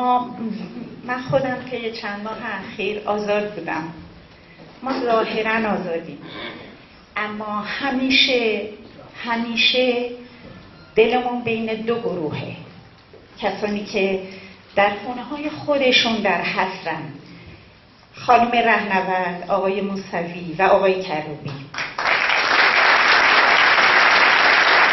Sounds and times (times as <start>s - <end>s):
Female speech, woman speaking: 0.0s - 4.1s, 4.8s - 6.5s, 7.2s - 10.3s, 11.0s - 12.7s, 13.4s - 17.3s, 18.2s - 21.7s.